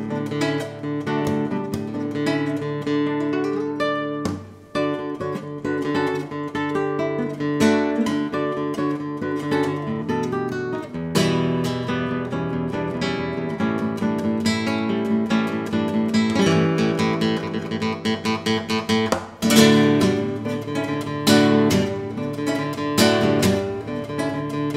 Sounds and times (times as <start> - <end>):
Acoustic guitar: 0.0 - 24.7.